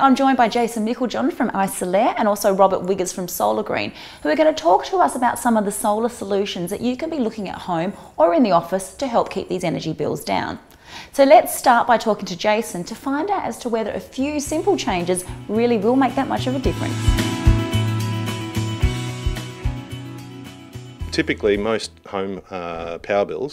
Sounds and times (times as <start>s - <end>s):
Speech: 0.0s - 10.6s, 11.2s - 16.8s, 21.1s - 23.5s
Music: 14.2s - 22.4s.